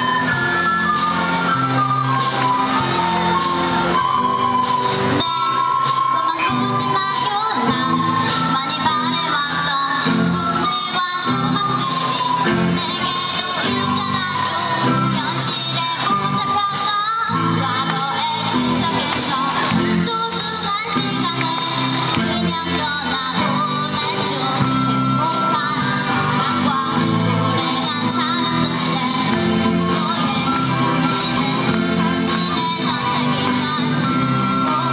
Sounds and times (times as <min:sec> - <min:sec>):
Music: 0:00.0 - 0:34.9
Child singing: 0:05.2 - 0:34.9.